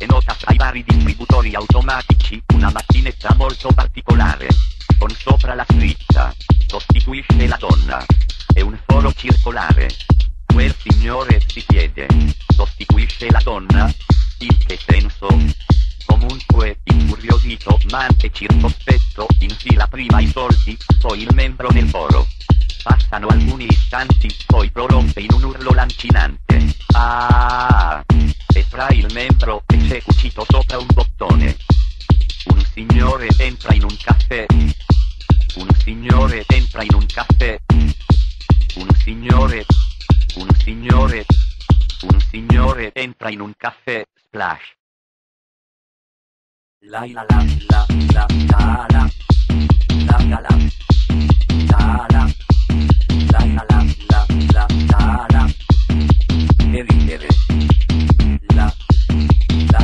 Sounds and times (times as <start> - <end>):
Speech: 0.0 - 22.3, 22.9 - 31.6, 32.5 - 34.8, 35.5 - 38.0, 38.8 - 41.3, 42.0 - 44.8, 46.8 - 49.2, 50.0 - 50.8, 51.6 - 52.4, 53.3 - 55.6, 56.6 - 57.6, 58.3 - 58.8
Music: 0.0 - 42.9, 47.3 - 59.8.